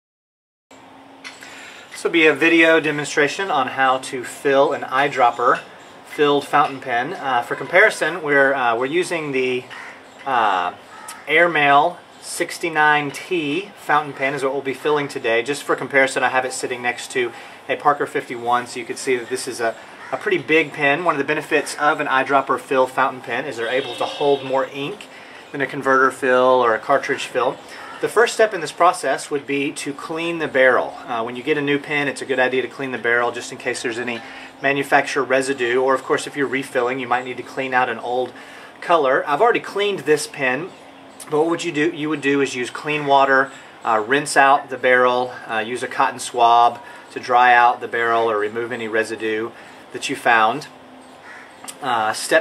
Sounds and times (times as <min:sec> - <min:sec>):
Speech: 0:02.0 - 0:50.7, 0:51.7 - 0:52.4.